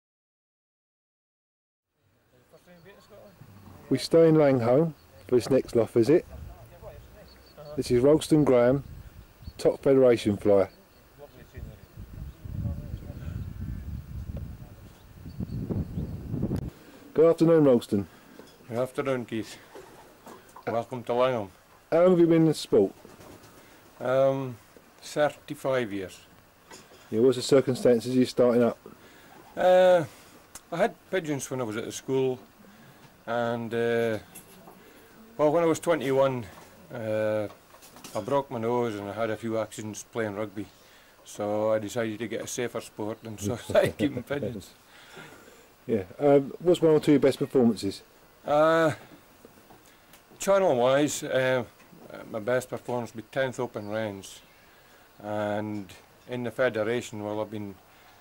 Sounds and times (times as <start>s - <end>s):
Speech: 2.4s - 8.8s, 9.6s - 13.4s, 17.2s - 18.1s, 18.7s - 19.6s, 20.6s - 23.0s, 24.0s - 26.3s, 27.1s - 28.8s, 29.6s - 30.1s, 30.7s - 32.4s, 33.3s - 34.3s, 35.4s - 44.8s, 45.9s - 49.0s, 50.4s - 54.5s, 55.2s - 57.8s.